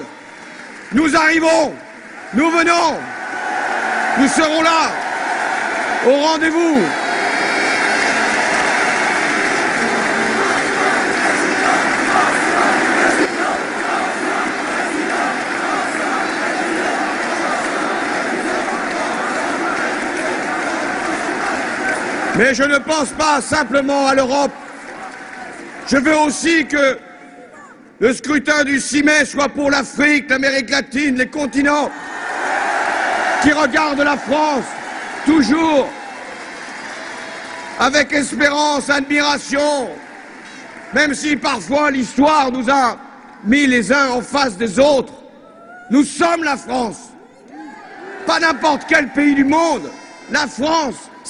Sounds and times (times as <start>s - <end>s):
Speech: 0.9s - 1.8s, 2.4s - 3.1s, 4.2s - 5.0s, 6.0s - 7.0s, 22.4s - 24.6s, 25.9s - 31.9s, 33.4s - 36.0s, 37.8s - 40.0s, 40.9s - 45.2s, 45.9s - 51.2s.